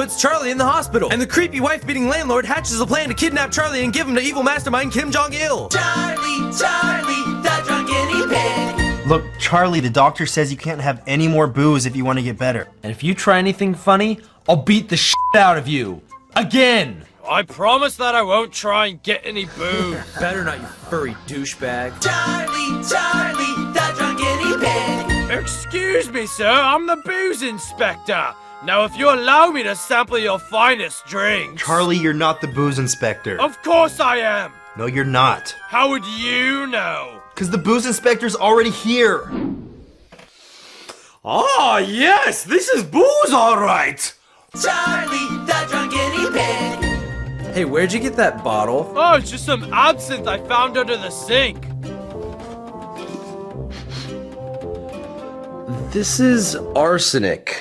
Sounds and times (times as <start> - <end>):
Speech: 0.0 - 5.7, 9.1 - 22.0, 25.3 - 39.3, 41.2 - 44.2, 47.6 - 51.7, 55.9 - 57.6
Music: 0.0 - 39.3, 43.5 - 57.6.